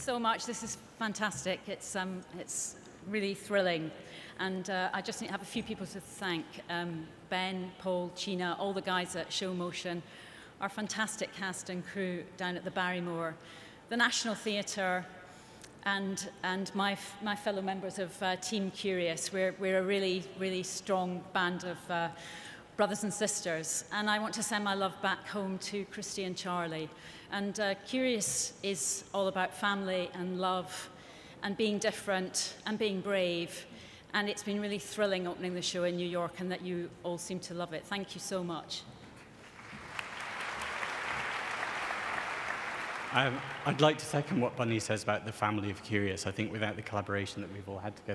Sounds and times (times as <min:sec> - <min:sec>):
Female speech, woman speaking: 0:00.0 - 0:10.0, 0:10.6 - 0:15.1, 0:15.8 - 0:22.2, 0:22.8 - 0:38.9
Narration, monologue: 0:00.0 - 0:39.5, 0:43.0 - 0:48.1.